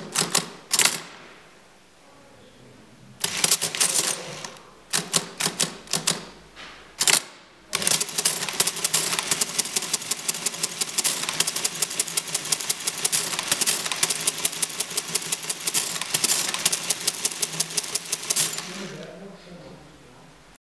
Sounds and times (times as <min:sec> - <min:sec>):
Typewriter: 0:00.0 - 0:01.1, 0:03.2 - 0:06.4, 0:07.0 - 0:19.1.